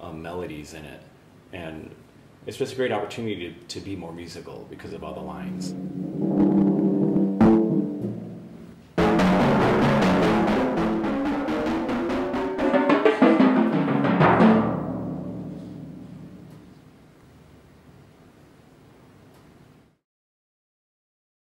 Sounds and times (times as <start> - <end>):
Speech: 0.0 - 5.8
Music: 5.4 - 16.8.